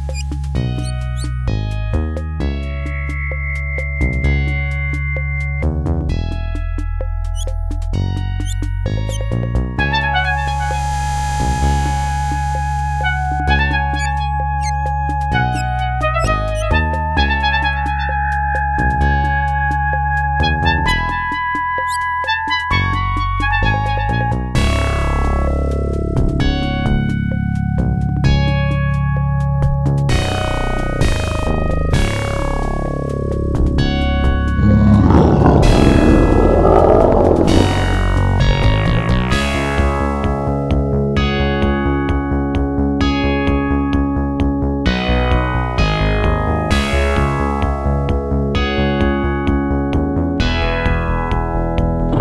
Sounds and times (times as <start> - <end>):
Music: 0.0 - 52.2.